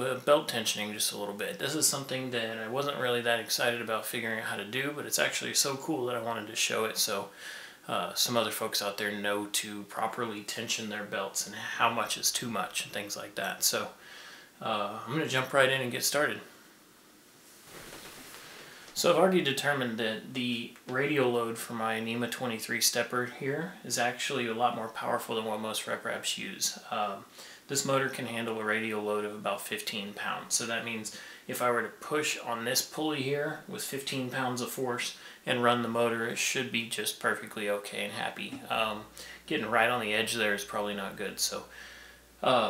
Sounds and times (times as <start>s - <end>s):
Speech: 0.0s - 14.0s, 14.6s - 16.5s, 19.0s - 41.7s, 42.4s - 42.7s.